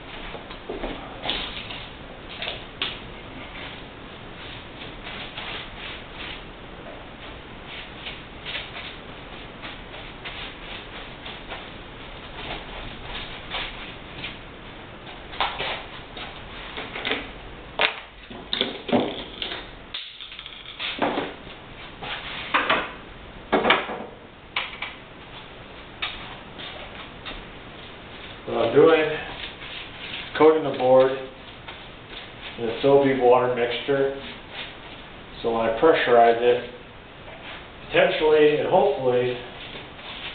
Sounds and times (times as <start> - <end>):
Speech: 28.5 - 29.4, 30.4 - 31.4, 32.6 - 34.4, 35.4 - 36.8, 37.9 - 39.5.